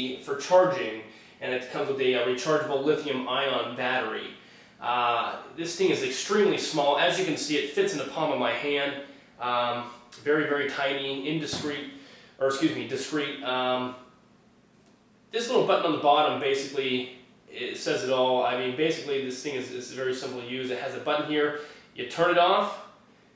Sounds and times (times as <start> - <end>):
Speech: 0.0 - 14.1, 15.3 - 23.0.